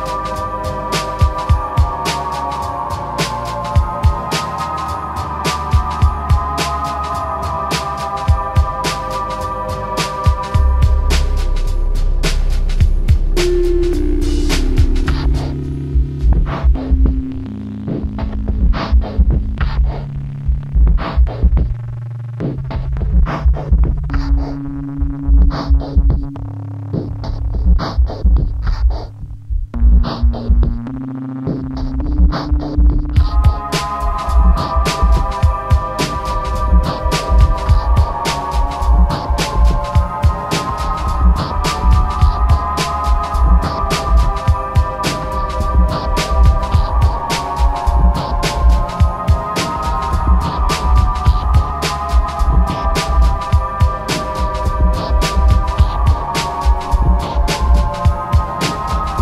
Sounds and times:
Hum: 0.0 - 59.2
Throbbing: 0.0 - 59.2.

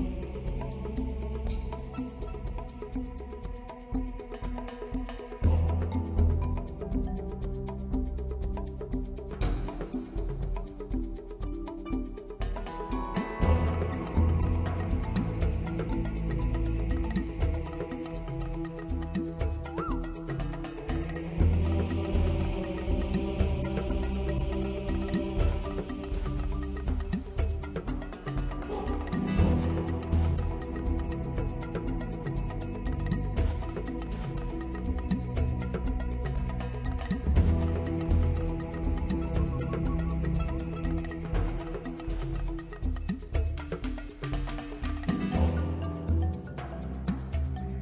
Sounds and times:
Background music: 0.0 - 47.8.

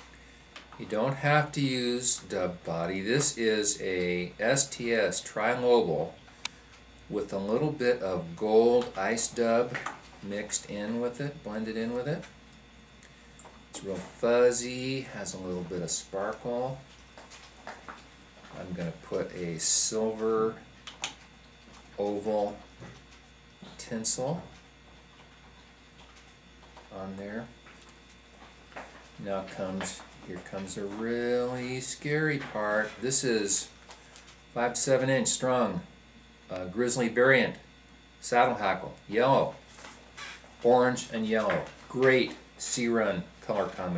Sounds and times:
Speech: 0.8 - 6.2, 7.1 - 12.3, 13.8 - 16.9, 18.5 - 20.6, 22.0 - 22.7, 23.6 - 24.6, 26.9 - 27.6, 29.2 - 33.7, 34.6 - 35.9, 36.5 - 39.6, 40.6 - 43.9.

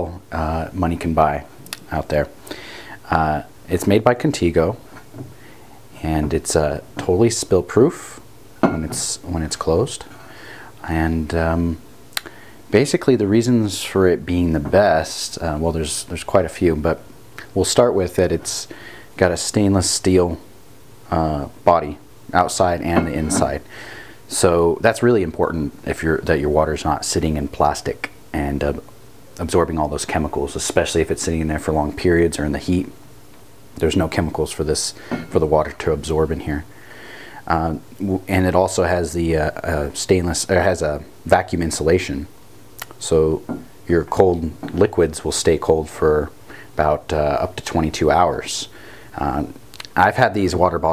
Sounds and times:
Speech: 0.0 - 2.4, 3.0 - 4.9, 6.0 - 10.1, 10.8 - 20.5, 21.1 - 23.7, 24.3 - 33.0, 33.8 - 36.7, 37.4 - 50.9.

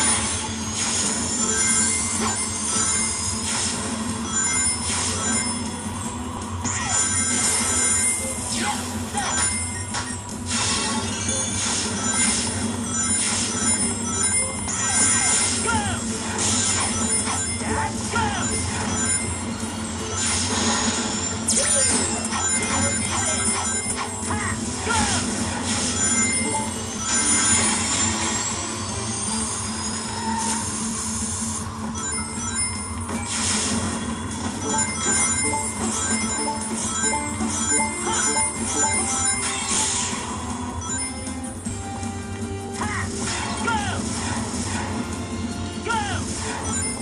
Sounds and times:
Speech: 15.2 - 16.1, 24.3 - 25.3, 42.8 - 44.0, 45.8 - 46.3.

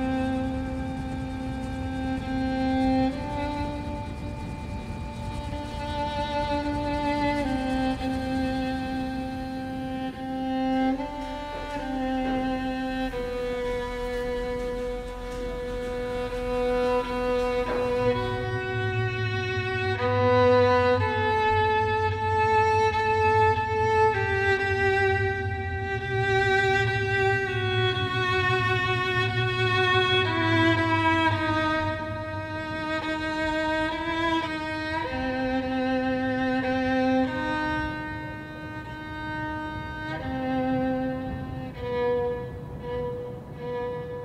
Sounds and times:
Bowed string instrument: 0.0 - 44.2.

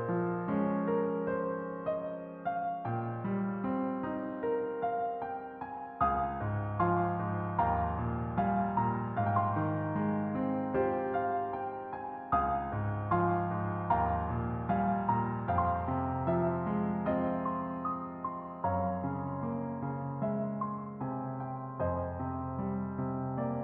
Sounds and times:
Music: 0.0 - 23.6.

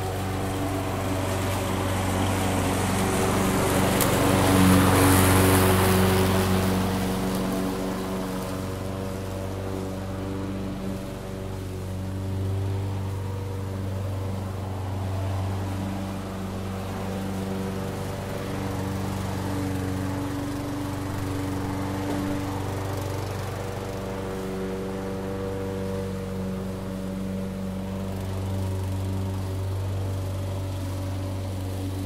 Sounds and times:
Lawn mower: 0.0 - 32.0.

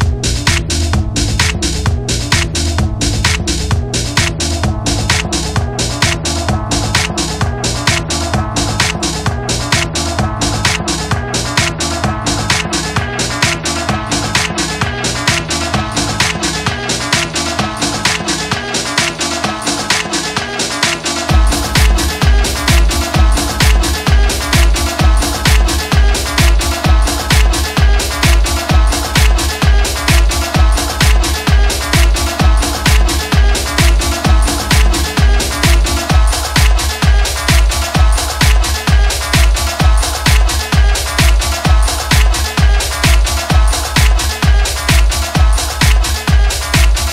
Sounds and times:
Disco: 0.0 - 47.1.

